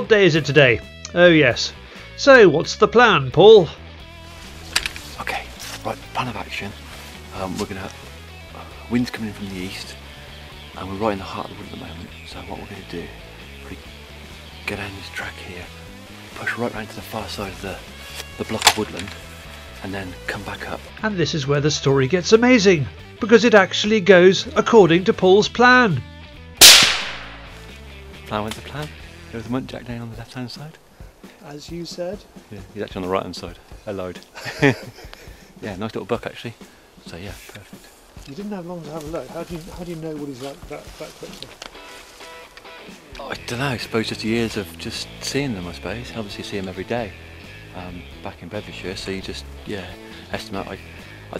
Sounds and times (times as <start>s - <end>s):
Speech: 0.0s - 3.8s, 5.1s - 8.0s, 8.6s - 10.0s, 10.7s - 13.9s, 14.6s - 15.7s, 16.3s - 19.2s, 19.8s - 26.0s, 28.2s - 30.8s, 31.4s - 34.3s, 35.6s - 41.6s, 43.1s - 47.1s, 47.7s - 51.4s
Music: 0.0s - 51.4s
Outside, rural or natural: 0.0s - 51.4s.